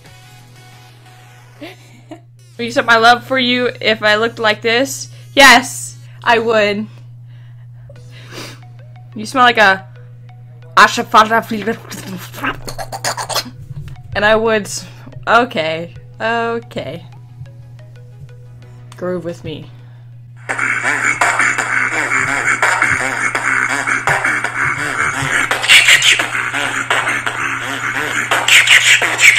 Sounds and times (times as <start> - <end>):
Speech: 10.8 - 12.6, 14.2 - 17.1, 19.0 - 19.7
Beatboxing: 11.6 - 13.6, 20.4 - 29.3.